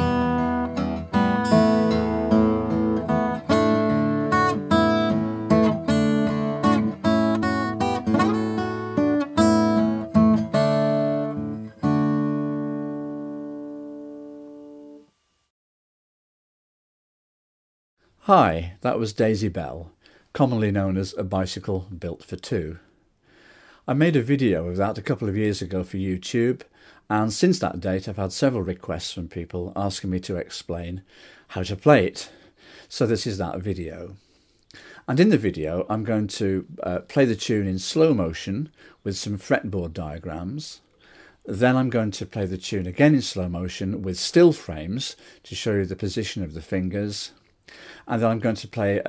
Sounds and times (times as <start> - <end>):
Music: 0.0 - 15.5.